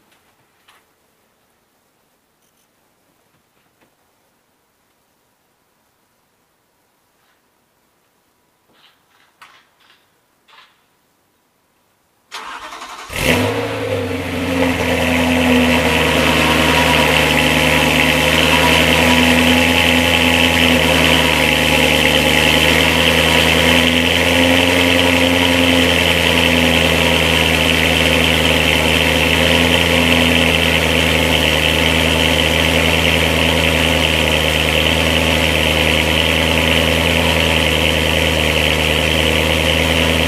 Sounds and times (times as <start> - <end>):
Car: 12.4 - 40.2.